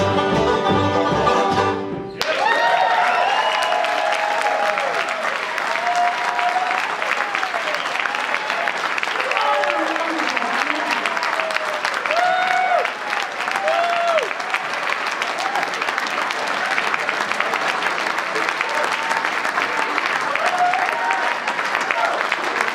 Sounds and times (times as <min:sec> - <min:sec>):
Bluegrass: 0:00.0 - 0:02.2
Applause: 0:02.2 - 0:22.7.